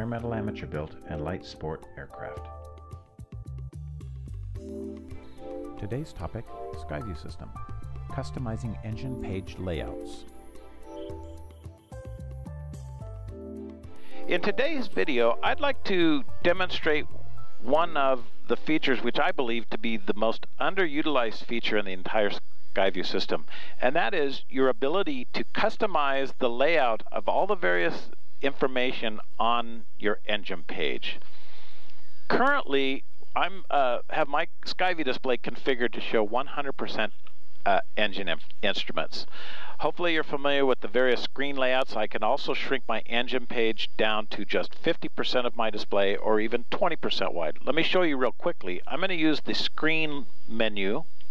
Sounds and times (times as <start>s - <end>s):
Speech: 0.0s - 2.5s, 5.8s - 7.5s, 8.1s - 10.3s, 14.3s - 17.1s, 17.7s - 31.2s, 32.3s - 51.1s.